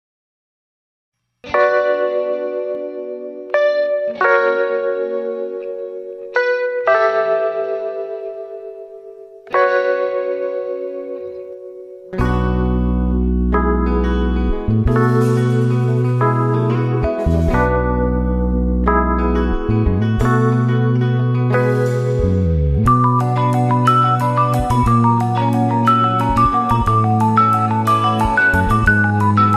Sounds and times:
Music: 1.2s - 29.5s.

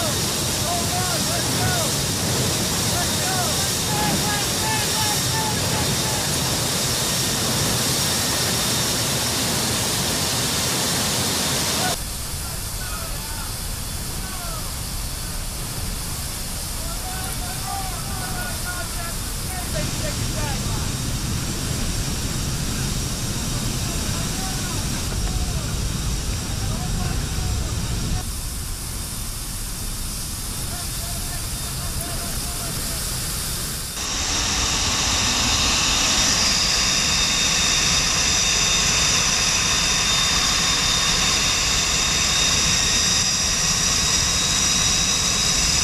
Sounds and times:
Jet engine: 0.0s - 45.8s.

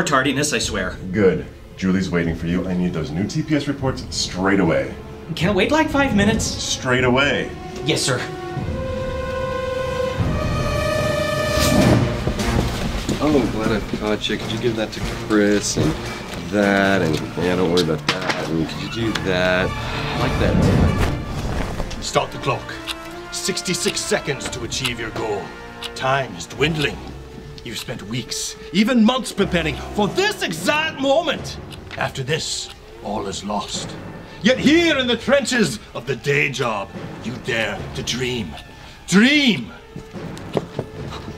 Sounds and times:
Speech: 0.0s - 8.3s, 13.2s - 20.8s, 22.0s - 39.8s
Music: 0.0s - 41.3s.

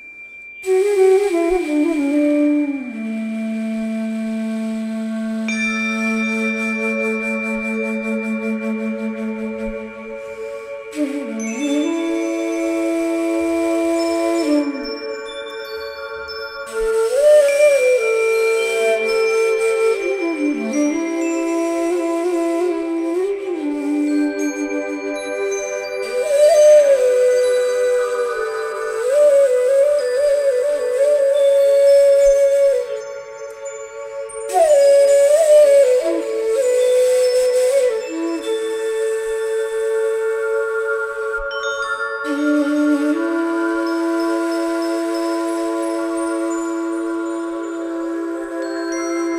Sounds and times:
Music: 0.0s - 49.3s.

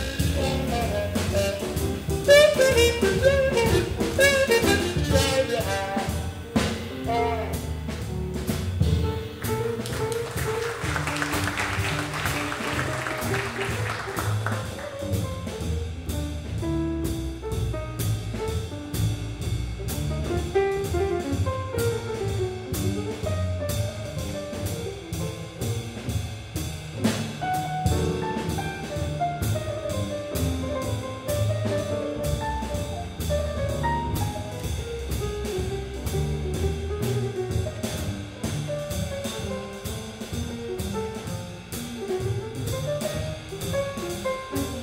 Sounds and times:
Double bass: 0.0s - 44.8s
Jazz: 0.0s - 44.8s
Piano: 0.0s - 44.8s
Trombone: 0.0s - 44.8s.

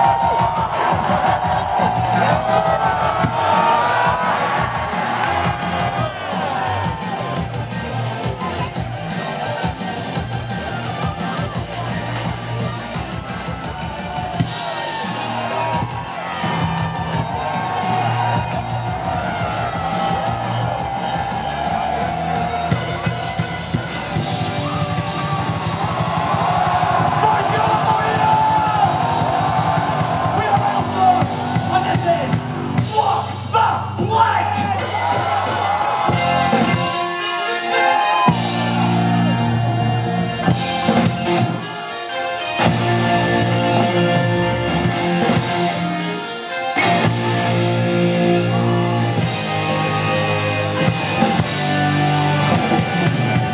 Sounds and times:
Music: 0.0s - 53.5s
Speech: 7.9s - 13.0s, 27.2s - 28.9s, 30.3s - 34.8s.

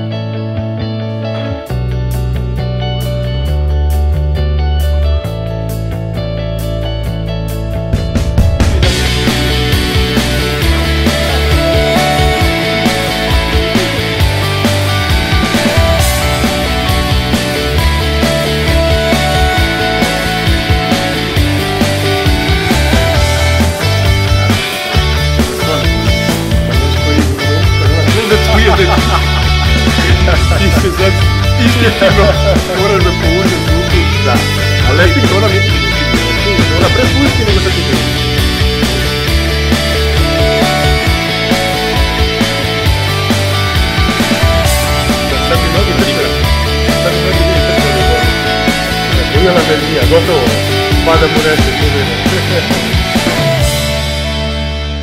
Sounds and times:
Music: 0.0s - 55.0s
Speech: 30.1s - 38.0s, 45.3s - 46.4s, 49.2s - 52.8s.

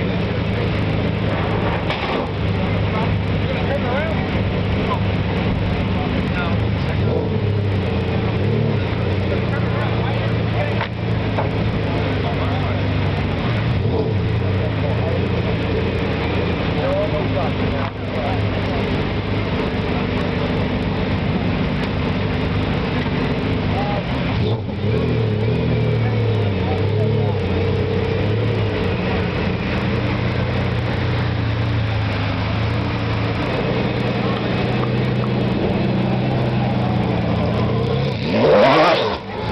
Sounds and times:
Race car, auto racing: 0.0s - 39.5s.

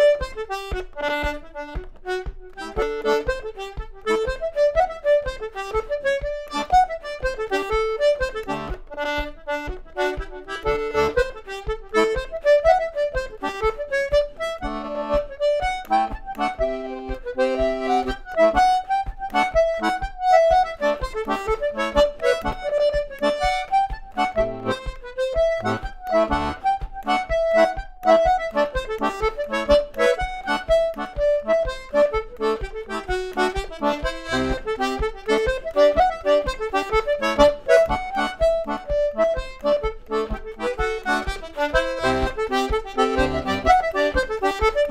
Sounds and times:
Accordion: 0.0s - 44.9s.

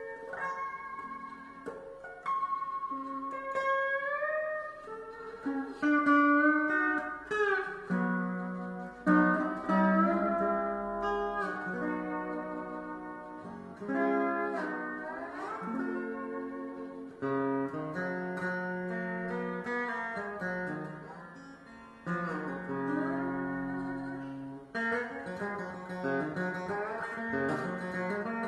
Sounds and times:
Bowed string instrument: 0.0s - 28.4s
Steel guitar, slide guitar: 0.0s - 28.4s.

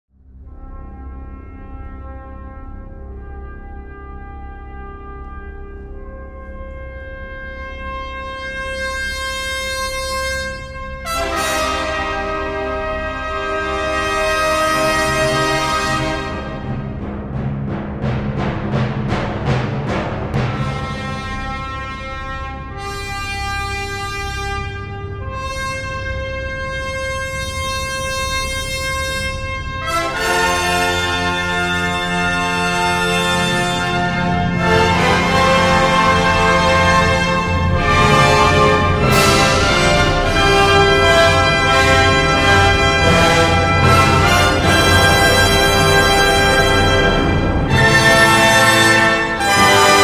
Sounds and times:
Brass instrument: 0.1s - 50.0s.

